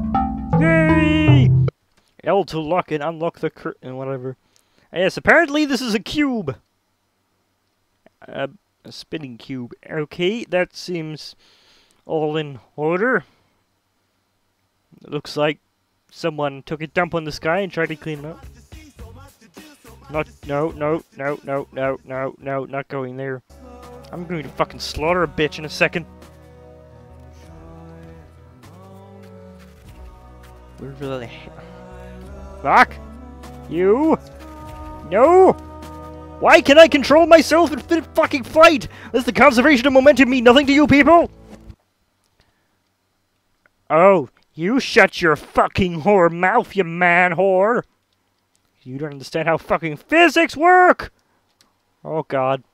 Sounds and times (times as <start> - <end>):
Music: 0.0 - 1.7, 17.8 - 22.1, 23.5 - 41.8
Speech: 0.6 - 1.5, 2.2 - 6.6, 8.1 - 11.4, 12.1 - 13.3, 15.0 - 18.4, 20.0 - 23.4, 24.1 - 26.0, 30.8 - 31.6, 32.6 - 33.0, 33.7 - 34.2, 35.0 - 35.6, 36.4 - 41.3, 43.9 - 47.9, 48.8 - 51.1, 52.0 - 52.6.